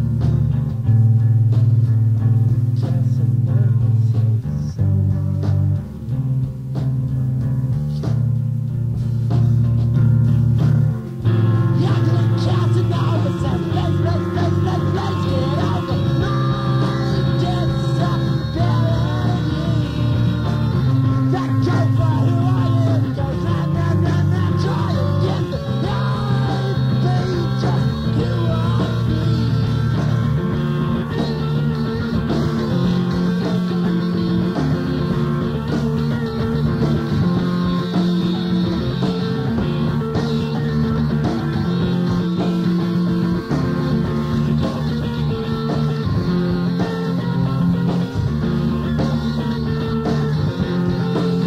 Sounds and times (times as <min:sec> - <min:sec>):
Music: 0:00.0 - 0:51.4.